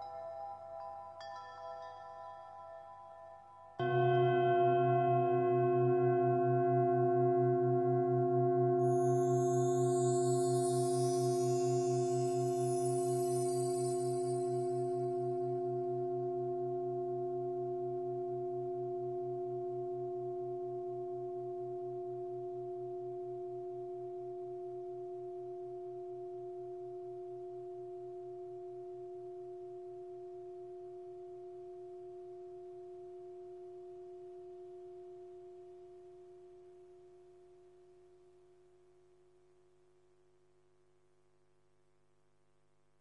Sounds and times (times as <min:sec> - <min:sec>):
Singing bowl: 0:00.0 - 0:36.9.